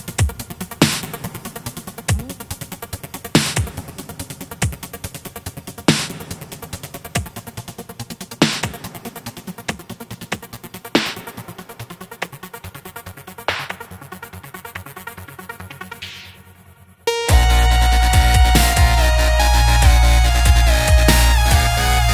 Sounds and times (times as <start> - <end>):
Dubstep: 0.0 - 16.4, 17.1 - 22.1.